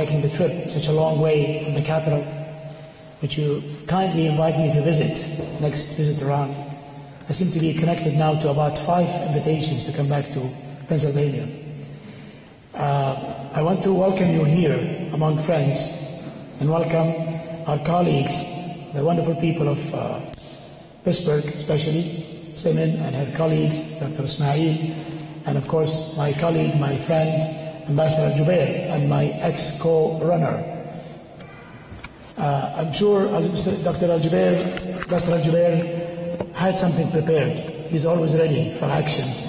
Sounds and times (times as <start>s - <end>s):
Male speech, man speaking: 0.0s - 2.4s, 3.2s - 11.6s, 12.7s - 20.3s, 21.0s - 30.8s, 32.4s - 39.4s.